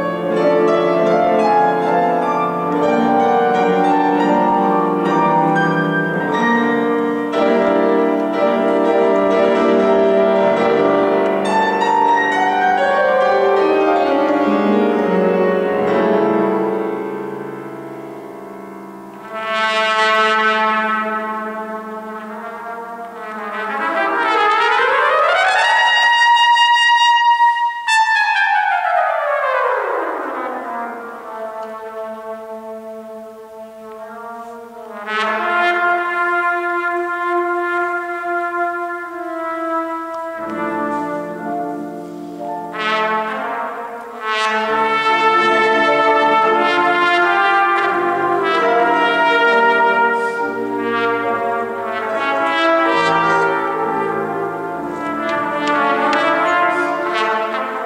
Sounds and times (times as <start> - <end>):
Trumpet: 0.0 - 57.8.